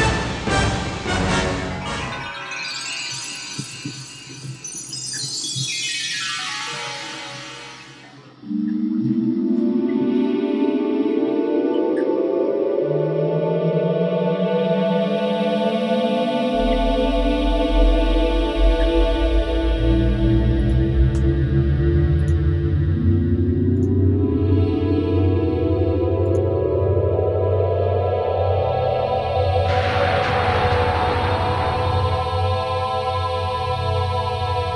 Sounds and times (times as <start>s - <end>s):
Music: 0.0s - 34.7s.